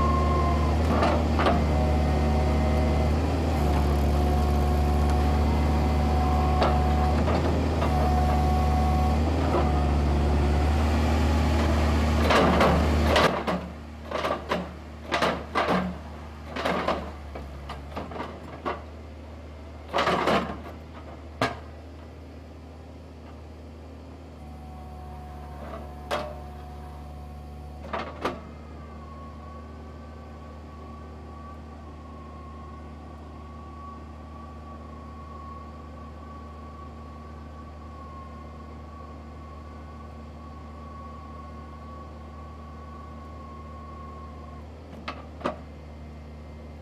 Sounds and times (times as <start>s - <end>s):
Vehicle: 0.0s - 46.8s.